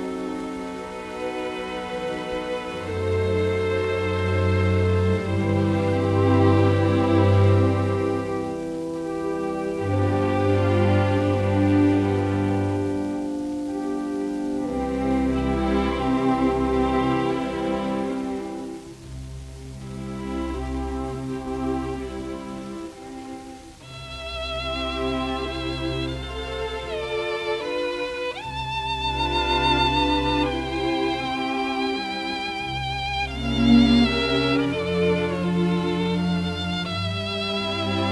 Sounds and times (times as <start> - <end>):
Violin, fiddle: 0.0 - 38.1.